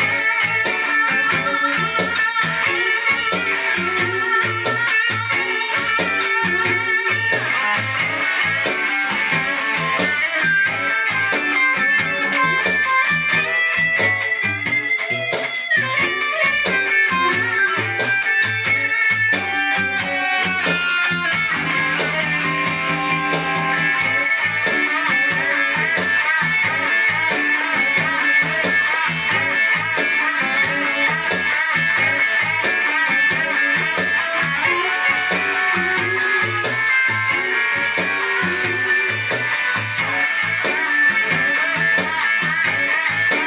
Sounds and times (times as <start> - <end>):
Music: 0.0 - 43.4.